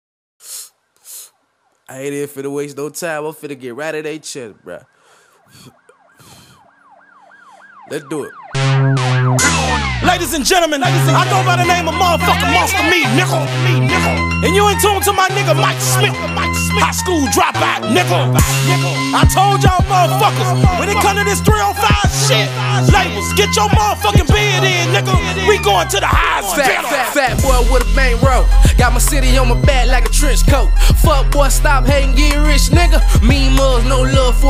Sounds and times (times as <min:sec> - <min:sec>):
Police car (siren): 0:04.7 - 0:10.6, 0:18.7 - 0:27.4
Music: 0:08.6 - 0:34.4.